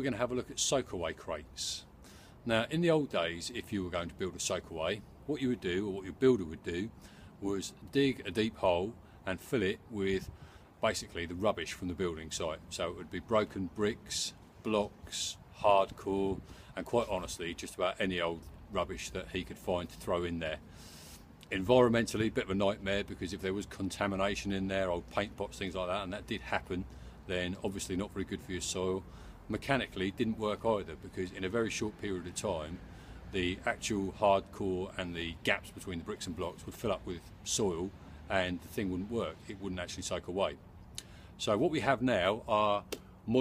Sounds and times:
Speech: 0.0 - 20.6, 21.5 - 40.6, 41.4 - 43.4.

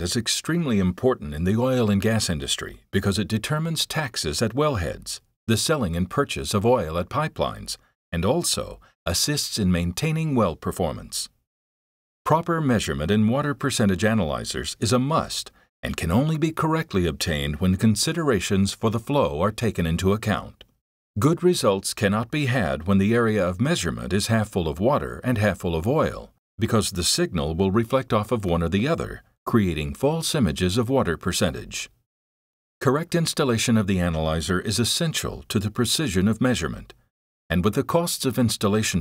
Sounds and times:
Speech: 0.0 - 11.4, 12.3 - 32.0, 32.8 - 39.0.

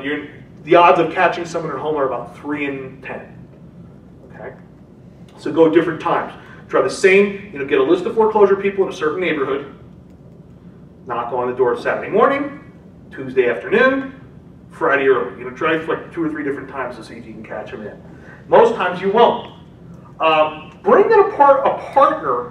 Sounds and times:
Speech: 0.0 - 3.4, 4.2 - 4.6, 5.4 - 9.8, 11.1 - 14.2, 14.8 - 19.6, 20.2 - 22.5.

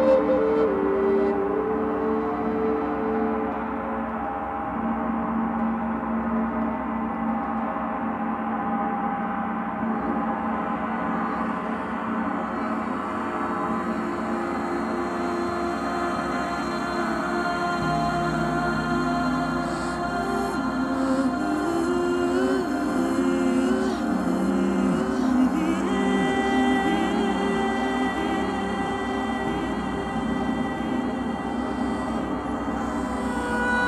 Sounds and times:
Music: 0.0 - 33.8.

